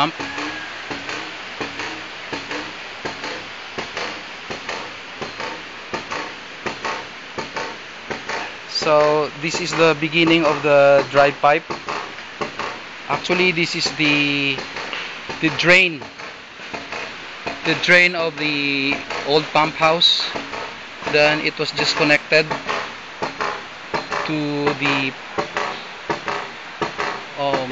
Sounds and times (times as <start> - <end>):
Speech: 8.7 - 11.6, 13.1 - 14.6, 15.4 - 16.0, 17.7 - 20.4, 21.1 - 22.5, 24.2 - 25.1, 27.4 - 27.7.